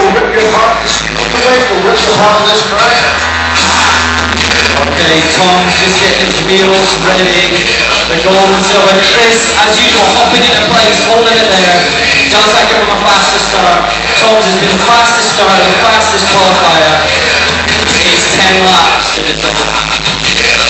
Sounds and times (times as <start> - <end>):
Music: 0.0 - 20.6
Speech: 0.0 - 20.6.